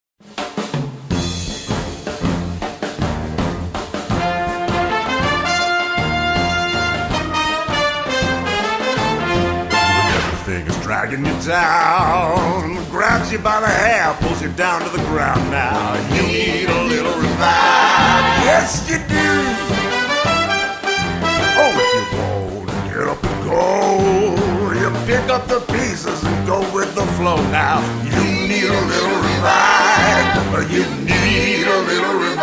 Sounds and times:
Music: 0.2s - 32.4s.

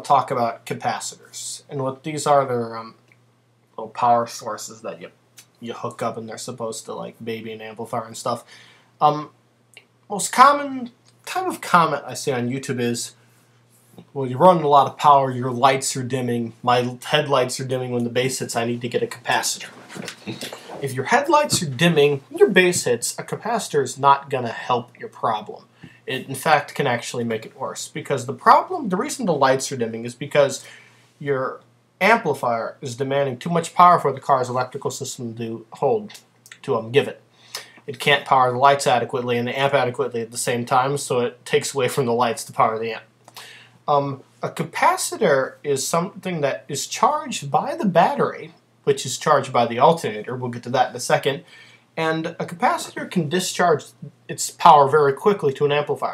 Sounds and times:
Speech: 0.0s - 3.0s, 3.8s - 9.4s, 10.1s - 13.2s, 14.0s - 37.2s, 37.8s - 43.1s, 43.9s - 56.1s.

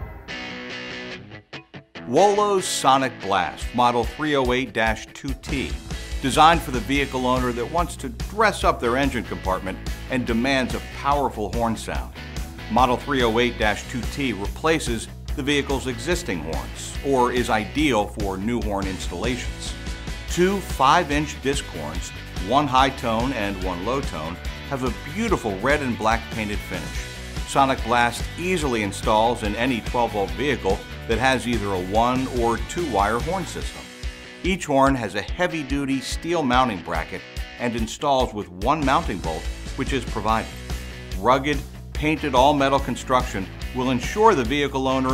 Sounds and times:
Music: 0.0s - 45.1s
Speech: 2.1s - 33.9s, 34.5s - 40.6s, 41.2s - 45.1s.

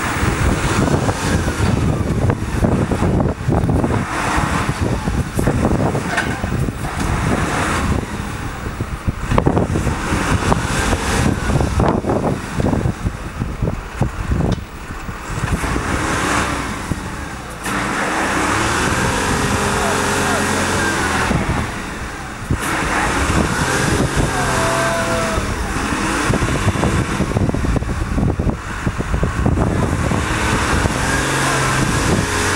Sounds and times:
Truck: 0.0s - 32.5s
Speech: 19.4s - 21.3s, 24.1s - 25.8s, 31.0s - 31.9s.

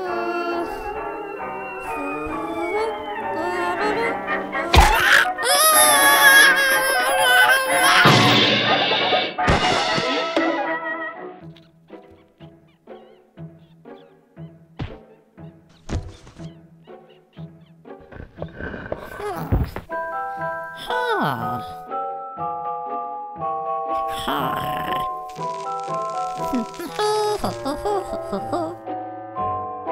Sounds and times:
Music: 0.0s - 29.9s.

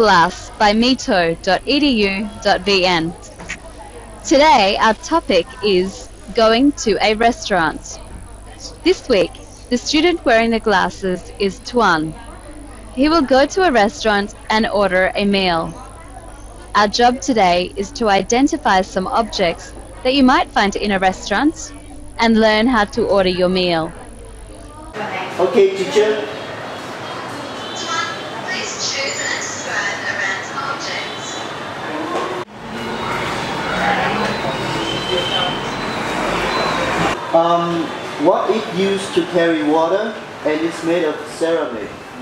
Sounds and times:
Speech: 0.0s - 8.0s, 8.6s - 15.8s, 16.8s - 24.0s, 37.4s - 41.8s.

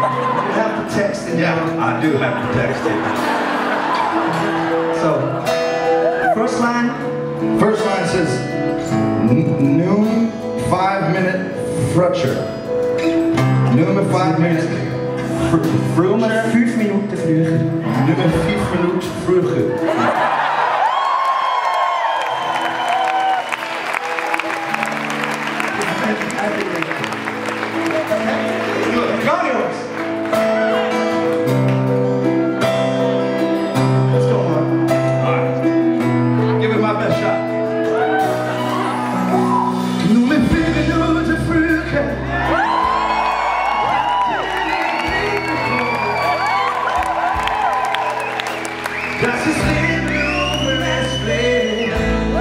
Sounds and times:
Music: 0.0s - 52.4s.

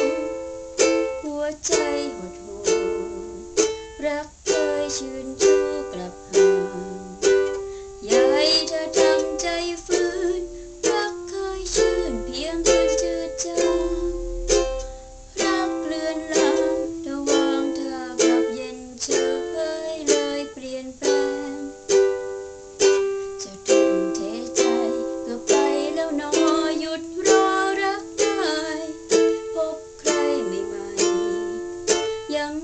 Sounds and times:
Inside, small room: 0.0s - 32.6s
Ukulele: 0.0s - 32.6s
Singing: 1.0s - 3.4s, 4.0s - 14.2s, 15.4s - 22.0s, 23.4s - 32.6s.

